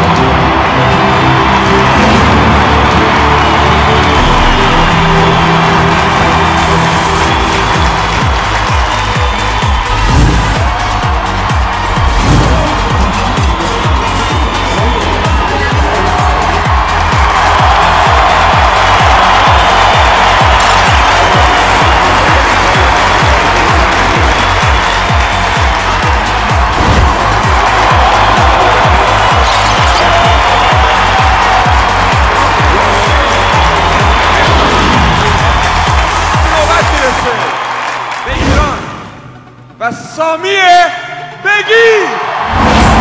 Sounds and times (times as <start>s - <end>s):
Soundtrack music: 0.0s - 41.5s, 42.2s - 43.0s.